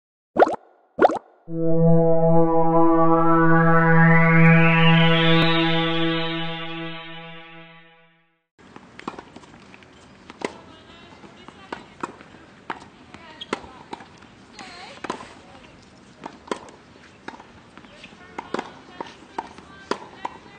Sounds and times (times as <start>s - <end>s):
Plop: 0.4s - 1.2s
Music: 1.5s - 8.3s.